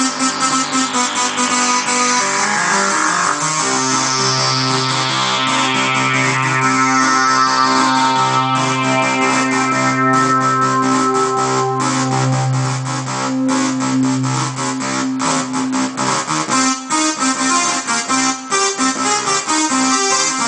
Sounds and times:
Music: 0.0s - 20.4s.

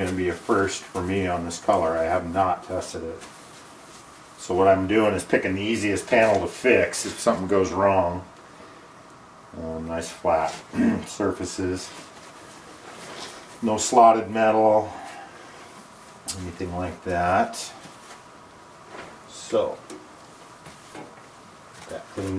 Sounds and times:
Speech: 0.0s - 3.3s, 4.4s - 8.3s, 9.5s - 12.1s, 13.6s - 15.1s, 16.3s - 17.8s, 19.3s - 20.0s, 21.8s - 22.3s
Inside, small room: 0.0s - 22.3s.

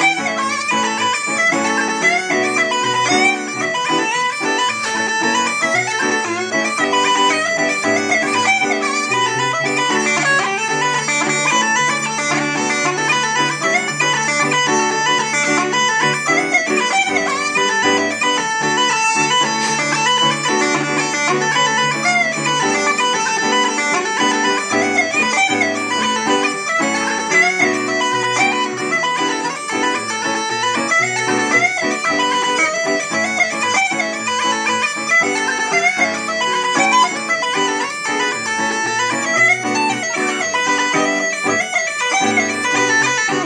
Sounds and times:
Bagpipes: 0.0s - 43.4s
Wind instrument, woodwind instrument: 0.0s - 43.4s.

